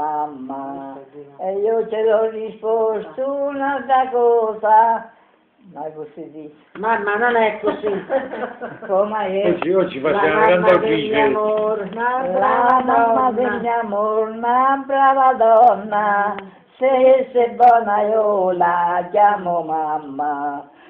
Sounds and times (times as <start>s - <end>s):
Singing: 0.0s - 20.9s
Speech: 9.4s - 11.6s.